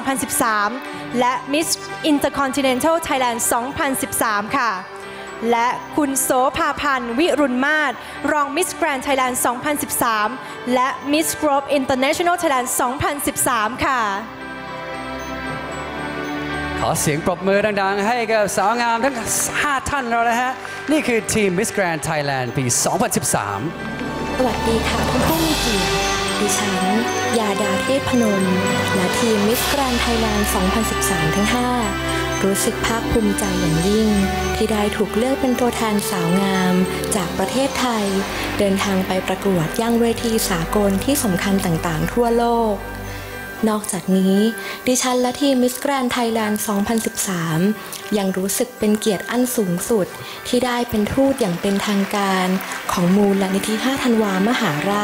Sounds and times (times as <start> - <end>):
Music: 0.0 - 55.0.